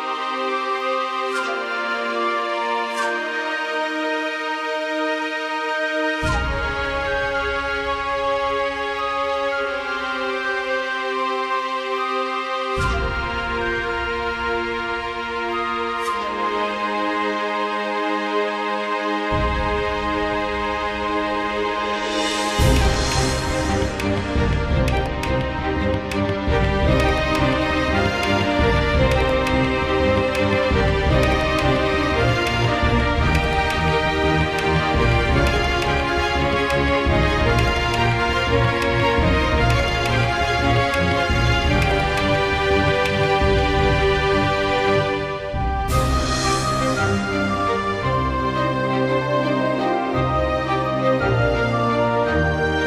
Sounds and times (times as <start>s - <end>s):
Music: 0.0s - 52.8s.